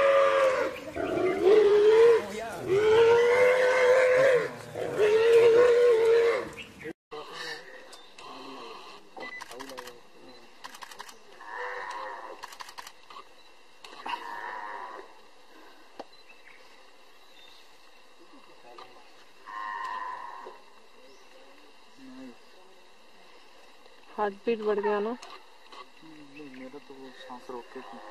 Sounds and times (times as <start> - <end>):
Wild animals: 11.4 - 12.5, 13.9 - 15.6.